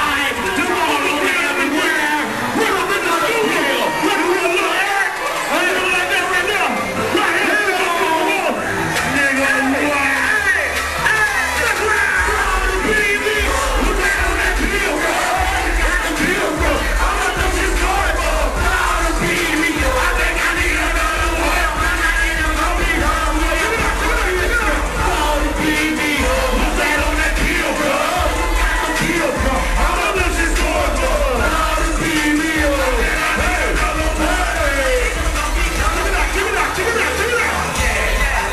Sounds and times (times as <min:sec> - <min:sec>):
Music: 0:00.0 - 0:38.5
Speech: 0:00.0 - 0:38.5.